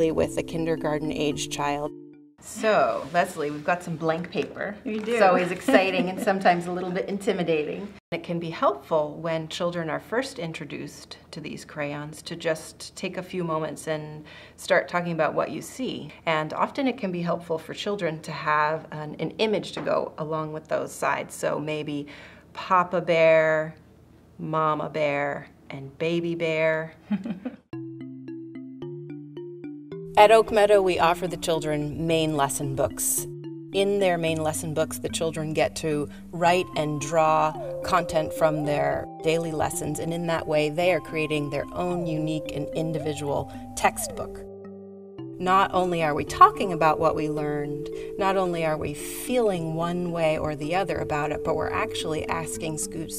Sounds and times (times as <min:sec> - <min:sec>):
Music: 0:00.0 - 0:03.6, 0:05.1 - 0:07.3, 0:27.7 - 0:53.1
Speech: 0:02.5 - 0:22.0, 0:30.2 - 0:33.2, 0:33.8 - 0:44.4.